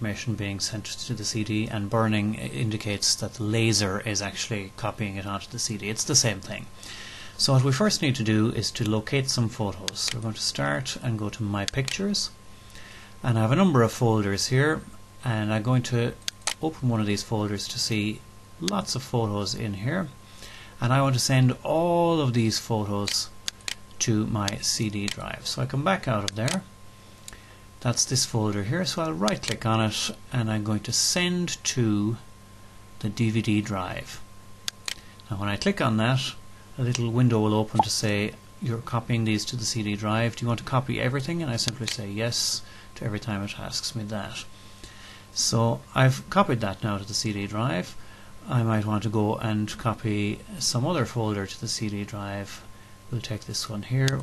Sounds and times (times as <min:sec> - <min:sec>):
Speech: 0:00.0 - 0:06.7, 0:07.4 - 0:12.4, 0:13.2 - 0:20.2, 0:20.8 - 0:23.4, 0:24.0 - 0:26.7, 0:27.8 - 0:32.3, 0:33.0 - 0:34.3, 0:35.3 - 0:44.5, 0:45.4 - 0:54.2.